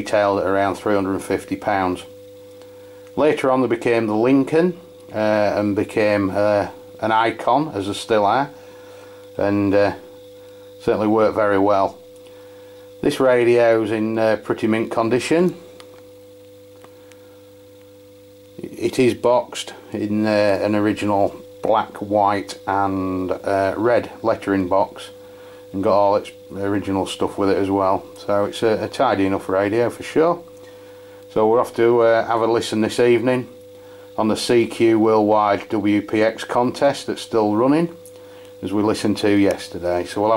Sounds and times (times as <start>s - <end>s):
Speech: 0.0s - 2.1s, 3.2s - 8.6s, 9.4s - 10.1s, 10.8s - 12.0s, 13.0s - 15.6s, 18.6s - 30.5s, 31.3s - 33.6s, 34.2s - 38.0s, 38.6s - 40.3s.